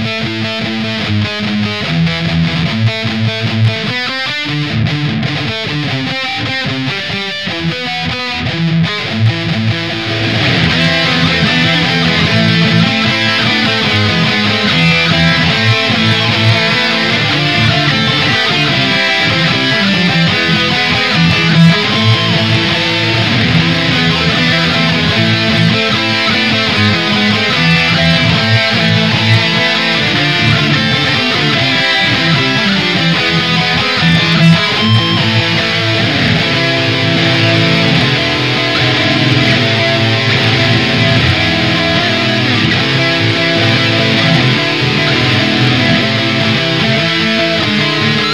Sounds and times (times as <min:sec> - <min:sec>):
Bass guitar: 0:00.0 - 0:48.3.